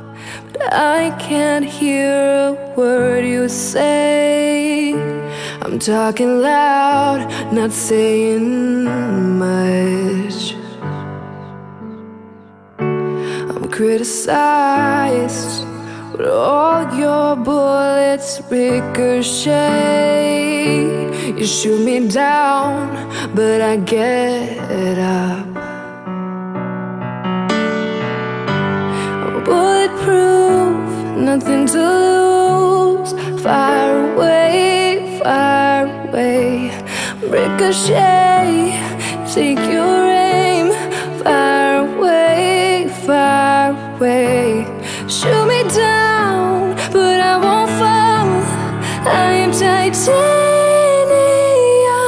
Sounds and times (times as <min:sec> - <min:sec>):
Music: 0:00.0 - 0:52.0.